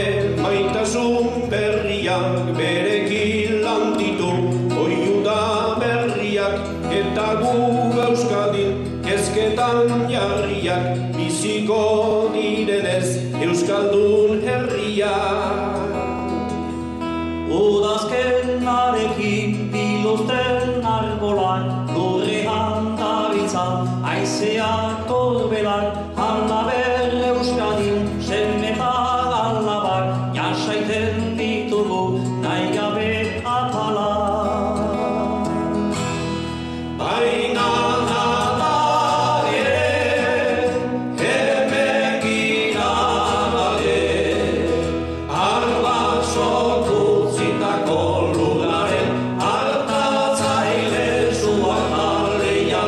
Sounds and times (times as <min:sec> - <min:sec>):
Male singing: 0:00.0 - 0:16.3, 0:17.4 - 0:35.6, 0:37.0 - 0:52.8
Music: 0:00.0 - 0:52.8.